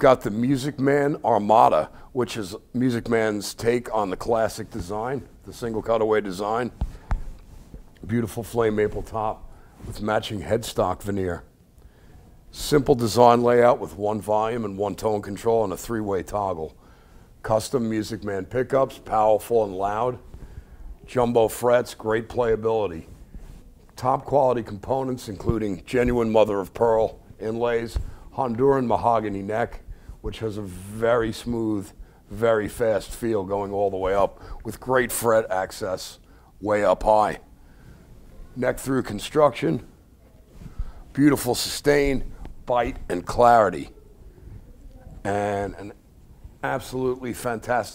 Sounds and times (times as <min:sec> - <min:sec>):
Speech: 0:00.0 - 0:06.8, 0:08.0 - 0:11.5, 0:12.5 - 0:16.8, 0:17.4 - 0:20.2, 0:21.1 - 0:23.1, 0:23.9 - 0:37.5, 0:38.5 - 0:39.9, 0:41.1 - 0:44.0, 0:44.8 - 0:46.0, 0:46.6 - 0:47.9.